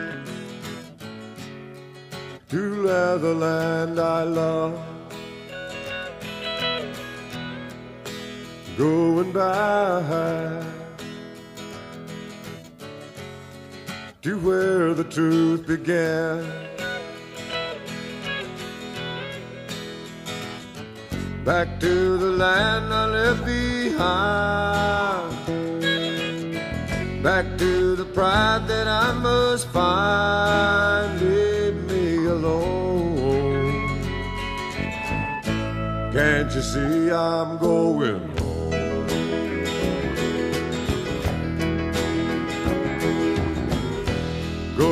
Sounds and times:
Music: 0.0 - 44.9.

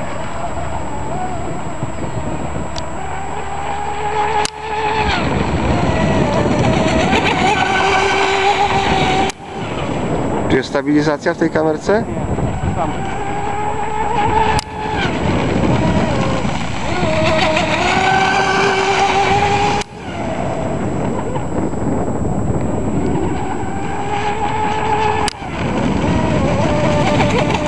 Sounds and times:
Motorboat, speedboat: 0.0 - 27.6.

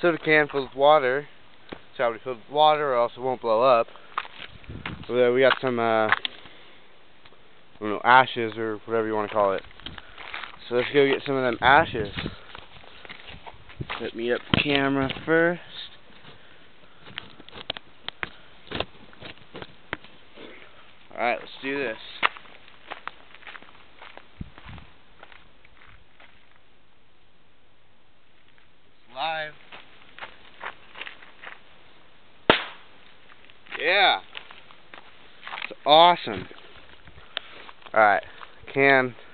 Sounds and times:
Speech: 0.0 - 1.3, 2.0 - 3.9, 5.0 - 6.2, 7.8 - 9.6, 10.6 - 12.4, 14.0 - 15.9, 21.1 - 22.3, 29.1 - 29.6, 33.7 - 34.3, 35.7 - 36.5, 37.9 - 39.2
Burst, pop: 32.5 - 32.9.

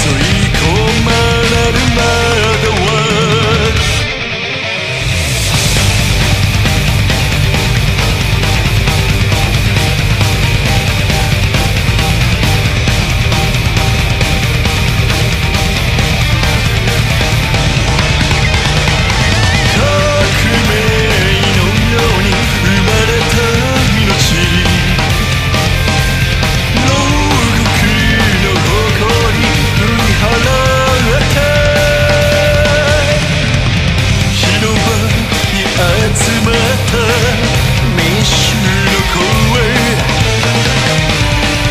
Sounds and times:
Singing: 0.0 - 4.4, 19.6 - 25.4, 26.7 - 33.6, 34.3 - 40.5
Music: 0.0 - 41.7.

